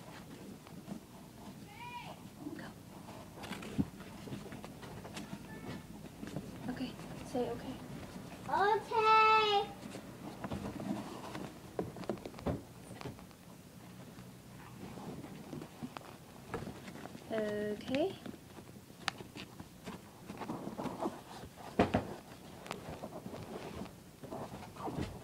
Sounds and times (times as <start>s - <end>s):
Inside, small room: 0.0s - 25.2s
Speech: 5.2s - 5.9s, 6.7s - 7.8s, 17.3s - 18.3s.